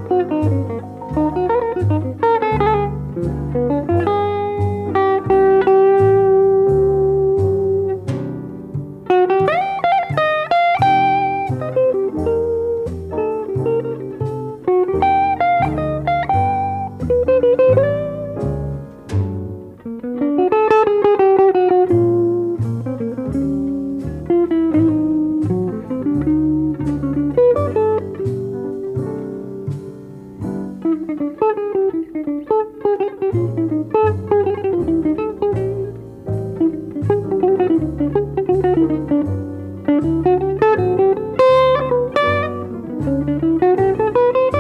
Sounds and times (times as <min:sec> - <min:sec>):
Guitar: 0:00.0 - 0:44.6.